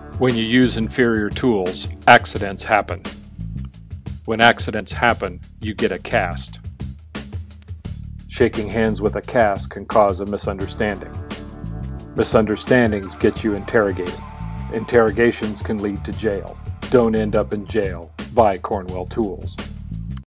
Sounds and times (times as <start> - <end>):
Music: 0.0 - 20.2
Speech: 0.2 - 3.1, 4.2 - 6.6, 8.3 - 11.2, 12.2 - 19.6.